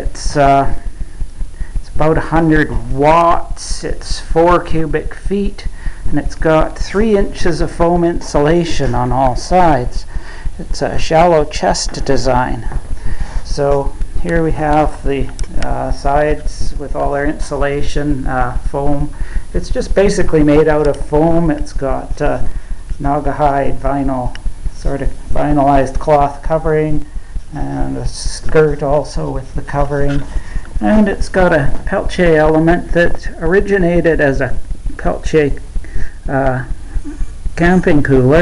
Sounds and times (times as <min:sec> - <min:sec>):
Speech: 0:00.0 - 0:00.9, 0:01.8 - 0:12.8, 0:13.4 - 0:35.6, 0:36.2 - 0:36.8, 0:37.6 - 0:38.4.